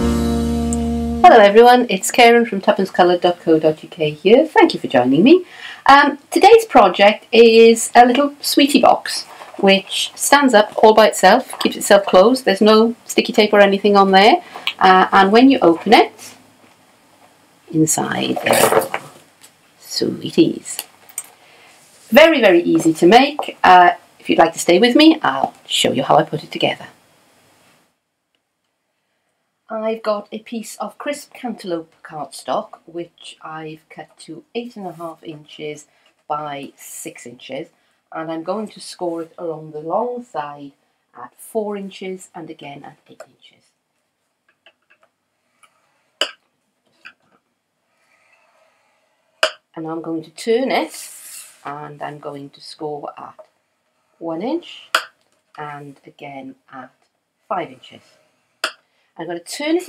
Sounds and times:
Speech: 0:01.2 - 0:16.4, 0:17.7 - 0:18.8, 0:19.8 - 0:20.8, 0:22.1 - 0:27.0, 0:29.7 - 0:43.6, 0:49.8 - 0:53.4, 0:54.2 - 0:54.9, 0:55.6 - 0:58.0, 0:59.2 - 0:59.8.

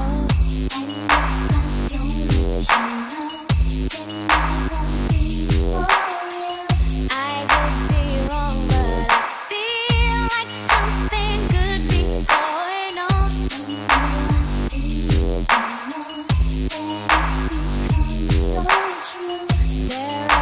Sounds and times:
Electronic music: 0:00.0 - 0:20.4.

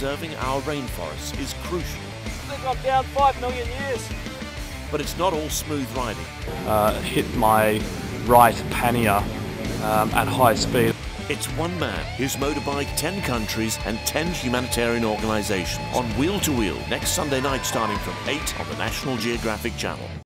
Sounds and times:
Speech: 0:00.0 - 0:04.1, 0:04.9 - 0:09.2, 0:09.8 - 0:20.2
Music: 0:00.0 - 0:20.2.

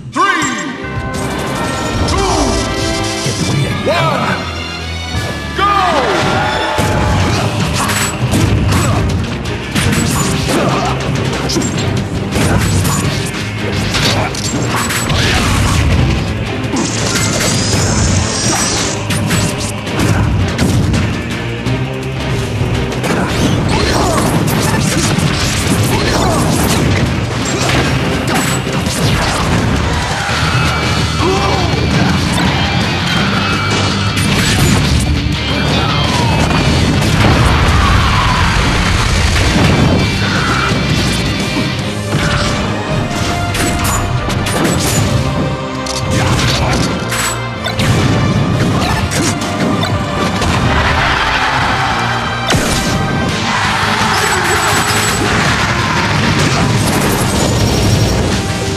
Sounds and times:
Music: 0:00.0 - 0:58.7
Smash, crash: 0:06.4 - 0:21.3, 0:22.4 - 0:58.7.

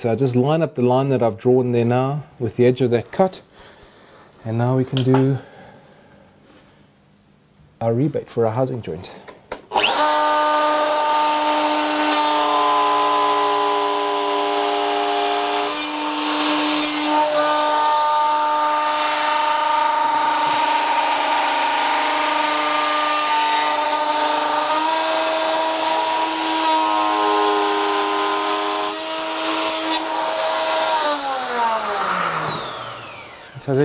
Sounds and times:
Speech: 0:00.0 - 0:03.5, 0:04.4 - 0:05.4, 0:07.8 - 0:09.2, 0:33.6 - 0:33.8.

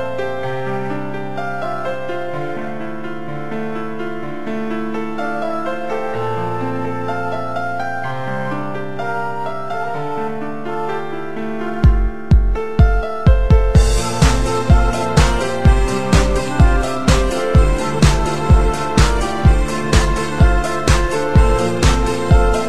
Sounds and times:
Music: 0:00.0 - 0:22.6.

